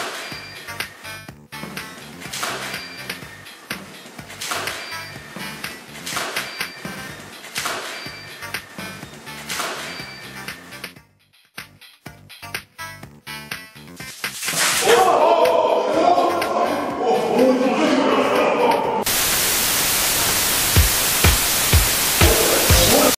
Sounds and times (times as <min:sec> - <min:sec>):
Music: 0:00.0 - 0:14.9, 0:15.6 - 0:18.4, 0:20.7 - 0:23.1
Speech: 0:14.8 - 0:19.0, 0:22.3 - 0:23.1.